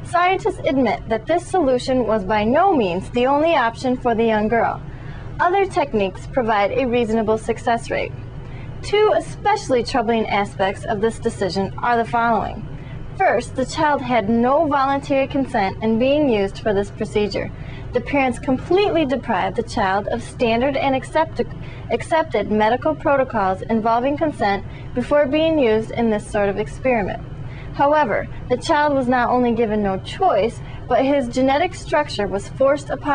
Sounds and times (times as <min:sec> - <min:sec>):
Inside, small room: 0:00.0 - 0:33.1
Speech: 0:00.1 - 0:04.8, 0:05.4 - 0:08.1, 0:08.8 - 0:27.2, 0:27.8 - 0:33.1.